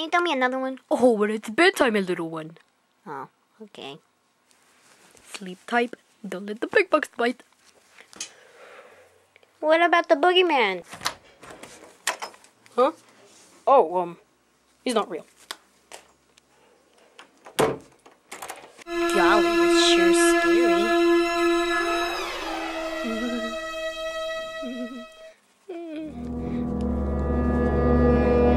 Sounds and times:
Speech: 0:00.0 - 0:04.0, 0:09.6 - 0:10.9, 0:13.6 - 0:14.2, 0:14.8 - 0:15.3, 0:19.1 - 0:20.9
Music: 0:18.9 - 0:25.3, 0:26.1 - 0:28.5.

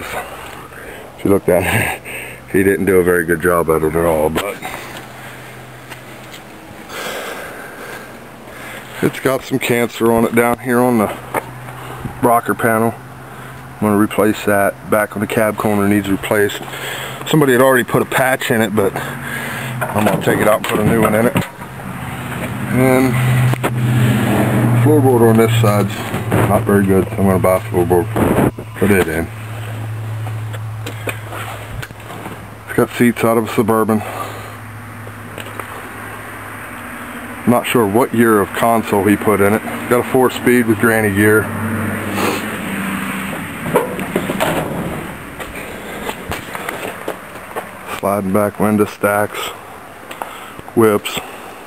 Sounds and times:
Speech: 0:01.2 - 0:04.7, 0:09.0 - 0:11.2, 0:12.2 - 0:13.0, 0:13.8 - 0:16.6, 0:17.3 - 0:19.0, 0:20.0 - 0:21.5, 0:22.7 - 0:23.2, 0:24.8 - 0:28.2, 0:28.8 - 0:29.3, 0:32.7 - 0:34.1, 0:37.4 - 0:41.5, 0:47.9 - 0:49.6, 0:50.8 - 0:51.3.

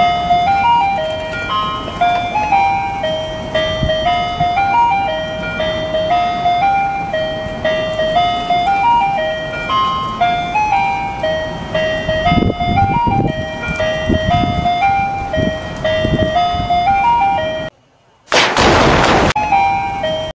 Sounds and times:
Explosion: 0:18.3 - 0:19.4.

